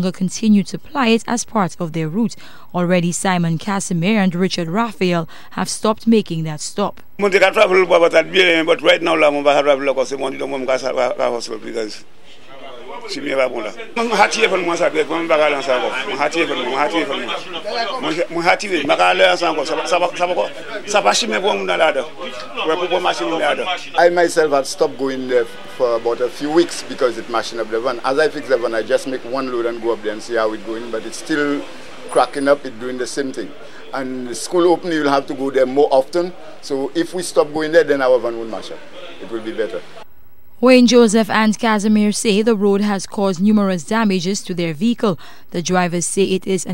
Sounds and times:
Speech: 0.0 - 39.9.

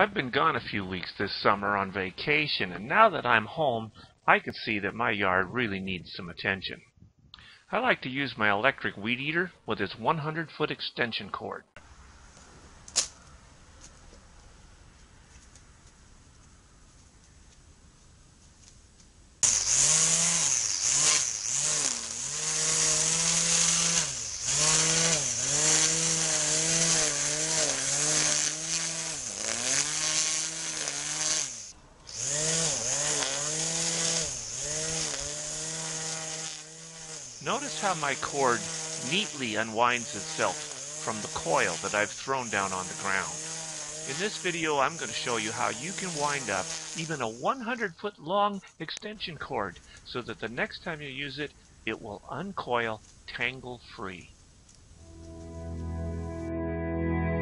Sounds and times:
Chainsaw: 19.4 - 48.0.

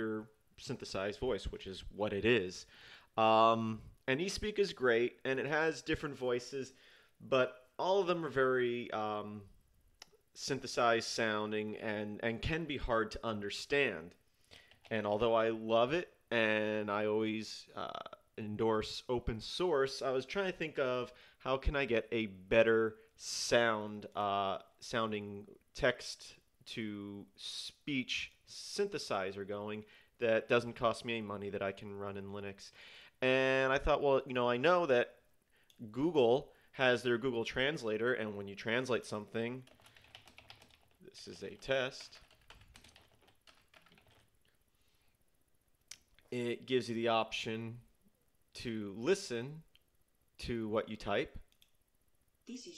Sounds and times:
Speech: 0.0 - 9.5, 10.4 - 14.2, 14.9 - 35.2, 35.8 - 39.7, 41.0 - 42.2, 46.3 - 47.9, 48.6 - 49.7, 50.4 - 51.5, 52.5 - 52.7.

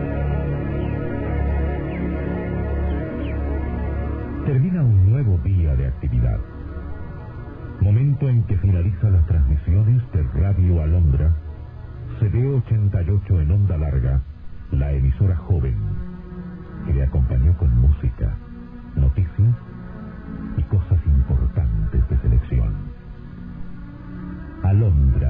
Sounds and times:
Music: 0.0 - 25.3
Speech: 4.4 - 6.4, 7.8 - 11.4, 12.1 - 16.0, 16.9 - 18.4, 19.0 - 19.6, 20.6 - 22.8, 24.6 - 25.3.

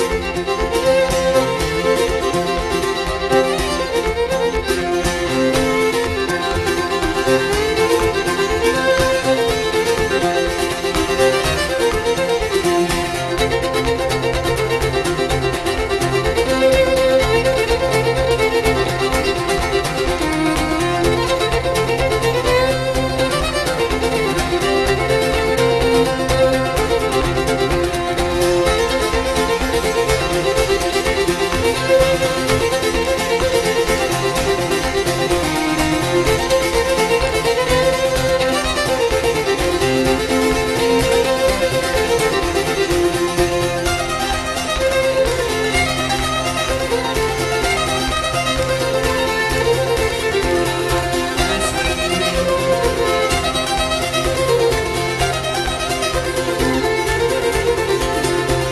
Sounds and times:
Violin, fiddle: 0.0 - 58.7.

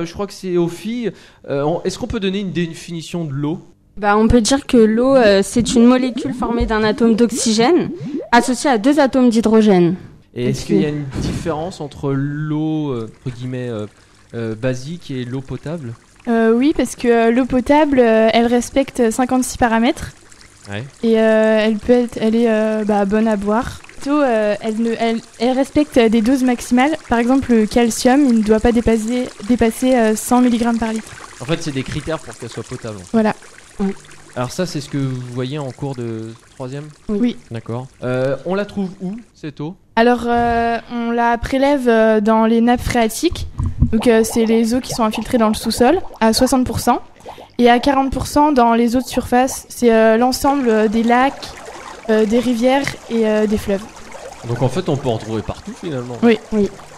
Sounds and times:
Speech: 0.0 - 20.0, 20.7 - 43.4, 54.5 - 56.7
Water: 4.0 - 39.4, 40.0 - 56.9.

